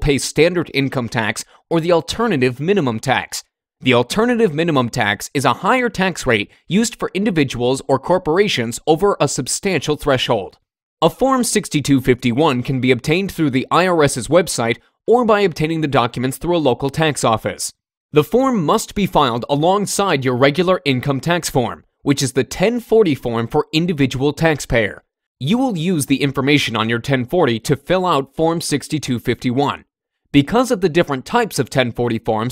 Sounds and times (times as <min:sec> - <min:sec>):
Speech: 0:00.0 - 0:32.5.